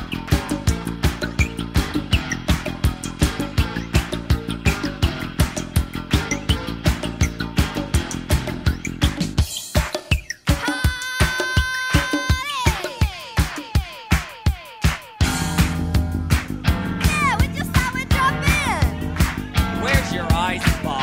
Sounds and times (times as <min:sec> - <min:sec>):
Music: 0:00.0 - 0:21.0.